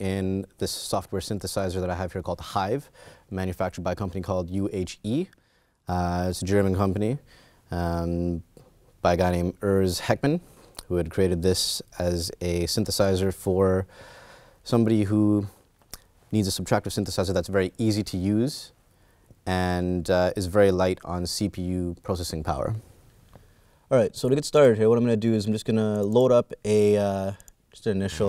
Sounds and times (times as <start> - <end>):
Speech: 0.0 - 13.9, 14.6 - 15.6, 16.3 - 18.8, 19.4 - 22.8, 23.9 - 28.2.